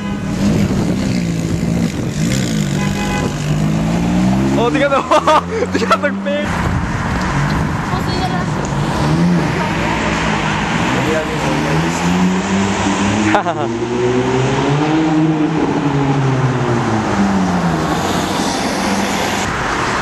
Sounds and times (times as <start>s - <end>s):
Car: 0.0s - 20.0s
Accelerating, revving, vroom: 0.3s - 6.5s, 8.6s - 20.0s.